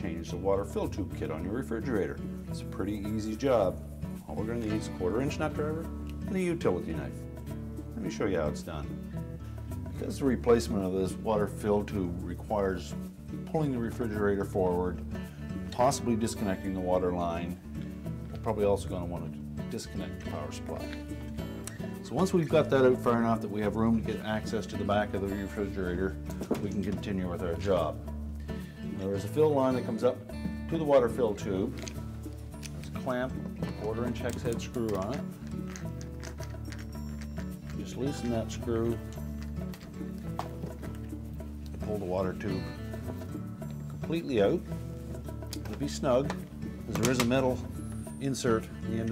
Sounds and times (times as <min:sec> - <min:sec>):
Speech: 0:00.0 - 0:07.2, 0:08.0 - 0:08.9, 0:10.0 - 0:15.0, 0:15.7 - 0:17.6, 0:18.4 - 0:20.9, 0:22.0 - 0:28.0, 0:28.9 - 0:31.8, 0:33.0 - 0:35.2, 0:37.8 - 0:39.0, 0:41.8 - 0:42.7, 0:44.0 - 0:44.7, 0:45.7 - 0:49.1
Music: 0:00.0 - 0:49.1.